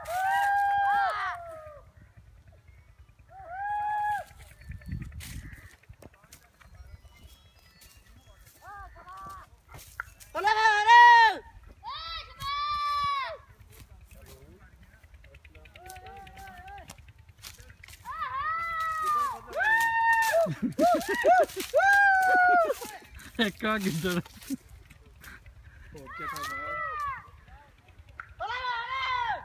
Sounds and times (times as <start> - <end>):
Speech: 13.5 - 16.9.